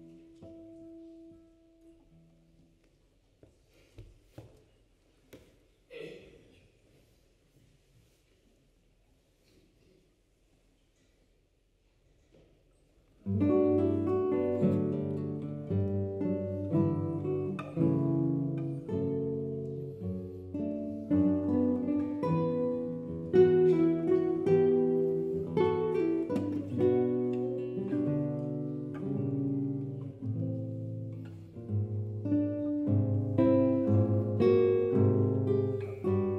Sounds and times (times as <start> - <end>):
Acoustic guitar: 0.0 - 4.4, 12.3 - 36.3
Strum: 13.2 - 36.3.